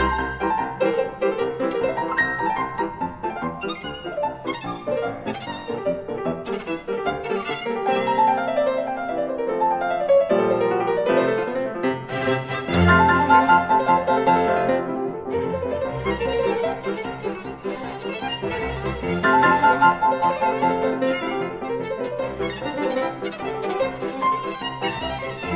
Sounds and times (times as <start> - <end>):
Violin, fiddle: 0.0 - 9.2, 11.8 - 25.5.